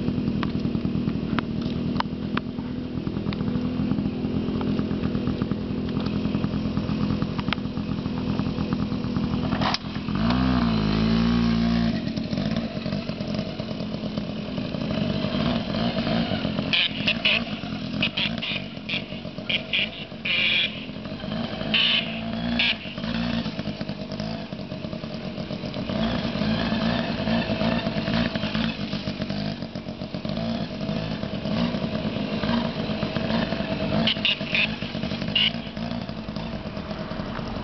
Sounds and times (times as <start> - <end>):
Outside, urban or manmade: 0.0 - 37.6.